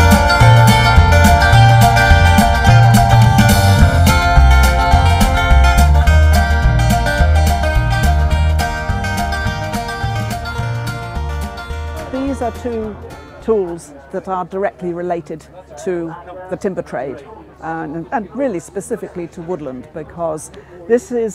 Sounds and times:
Music: 0.0s - 13.9s
Speech: 12.1s - 21.3s.

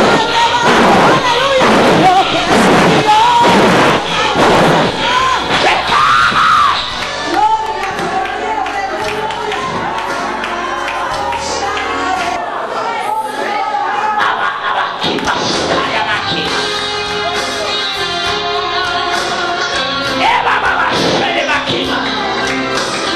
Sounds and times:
Music: 0.0s - 12.4s, 15.0s - 23.1s
Singing: 0.0s - 14.2s, 15.1s - 23.1s.

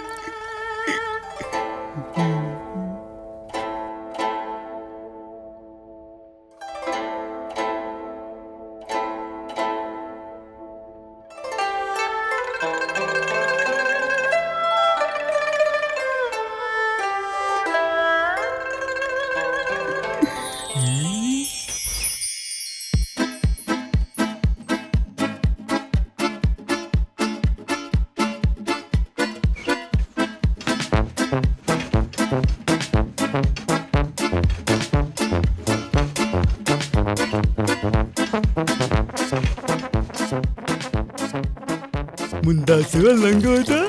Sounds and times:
Music: 0.0s - 43.8s.

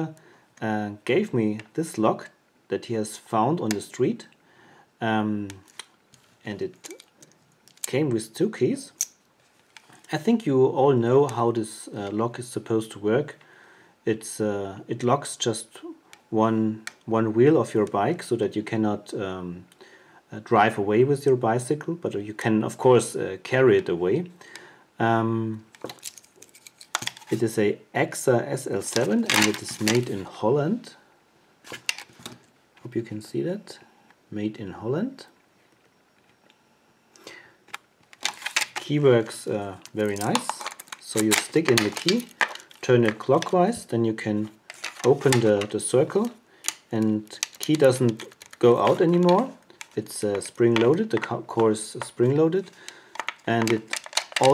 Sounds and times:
Speech: 0.0s - 4.4s, 5.0s - 5.7s, 6.4s - 7.0s, 7.9s - 9.0s, 10.1s - 13.4s, 14.0s - 19.7s, 20.3s - 24.4s, 25.0s - 25.7s, 27.3s - 31.0s, 32.8s - 35.4s, 38.8s - 52.7s, 53.4s - 54.5s.

